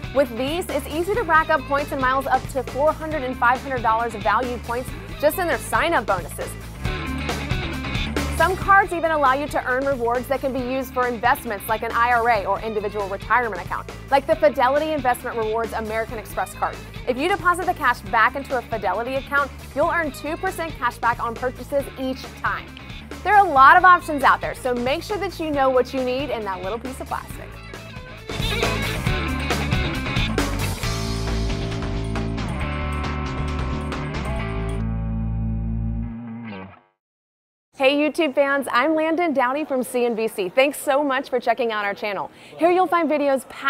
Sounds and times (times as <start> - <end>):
Effects unit: 27.6 - 37.0.